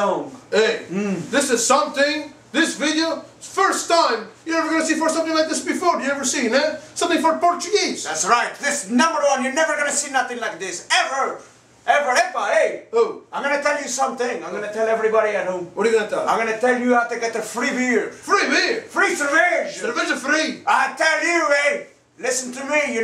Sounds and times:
Speech: 0:00.0 - 0:23.0.

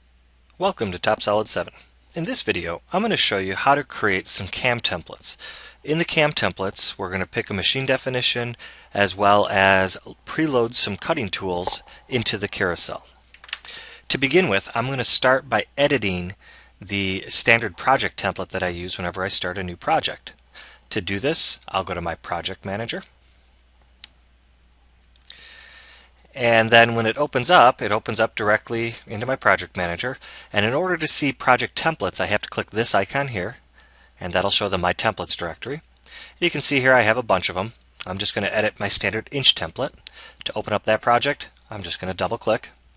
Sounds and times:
Speech: 0:00.6 - 0:13.2, 0:14.1 - 0:23.1, 0:26.3 - 0:33.6, 0:34.2 - 0:42.8.

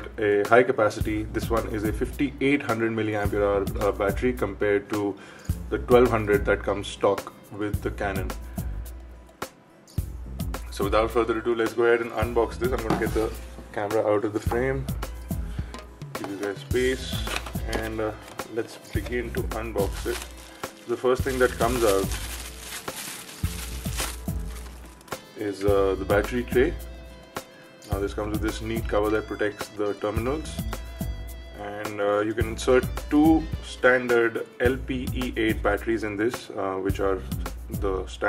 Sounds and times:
Speech: 0:00.0 - 0:08.4, 0:10.7 - 0:14.9, 0:16.2 - 0:20.3, 0:20.9 - 0:22.2, 0:25.4 - 0:26.8, 0:27.9 - 0:30.7, 0:31.6 - 0:38.2
Music: 0:00.0 - 0:38.2.

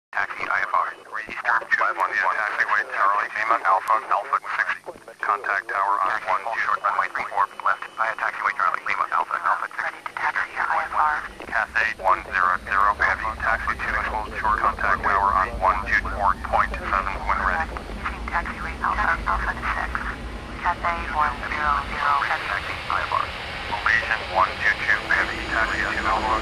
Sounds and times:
Radio: 0:00.2 - 0:26.4
Speech: 0:00.2 - 0:26.4.

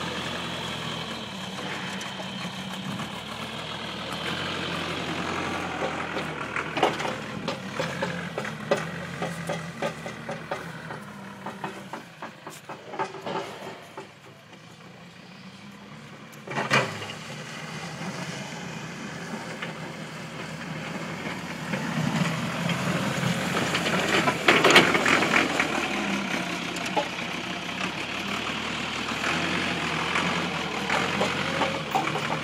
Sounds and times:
Outside, rural or natural: 0:00.0 - 0:32.4
Vehicle: 0:00.0 - 0:32.4.

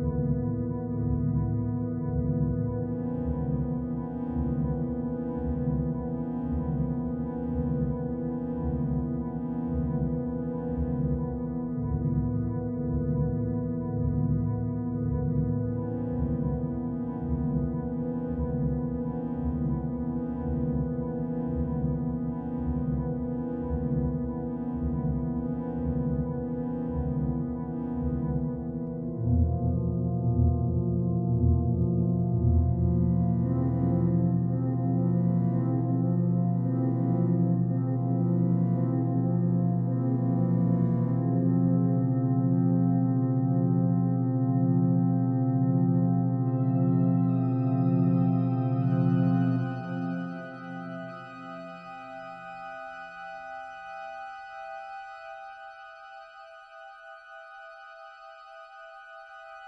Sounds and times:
Music: 0:00.0 - 0:59.6.

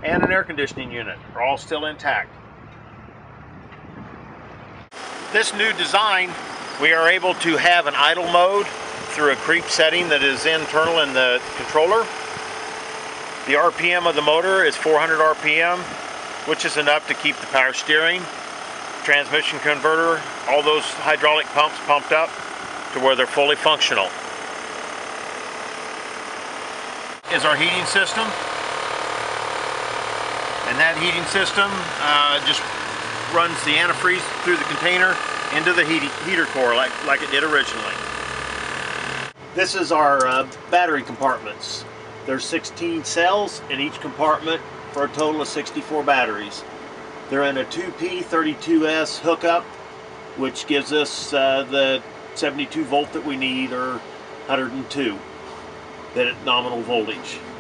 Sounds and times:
Speech: 0:00.0 - 0:02.3, 0:05.4 - 0:12.1, 0:13.5 - 0:15.9, 0:16.5 - 0:18.3, 0:19.0 - 0:22.3, 0:23.0 - 0:24.1, 0:27.3 - 0:28.4, 0:30.7 - 0:32.7, 0:33.3 - 0:38.0, 0:39.6 - 0:46.6, 0:47.3 - 0:49.7, 0:50.4 - 0:55.2, 0:56.2 - 0:57.5
Engine: 0:00.0 - 0:57.6.

